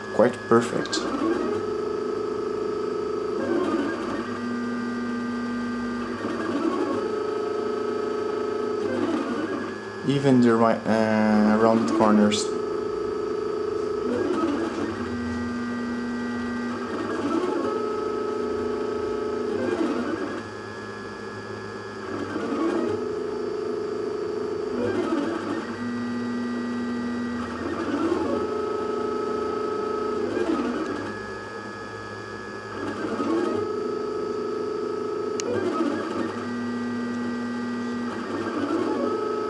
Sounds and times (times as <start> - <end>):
Printer: 0.0 - 39.5
Speech: 0.2 - 1.1, 10.1 - 12.6.